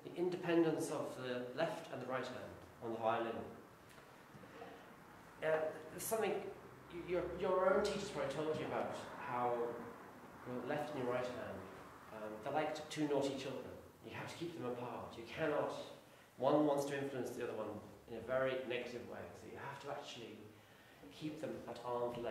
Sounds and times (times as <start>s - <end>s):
Speech: 0.0s - 3.6s, 5.4s - 20.5s, 21.1s - 22.3s.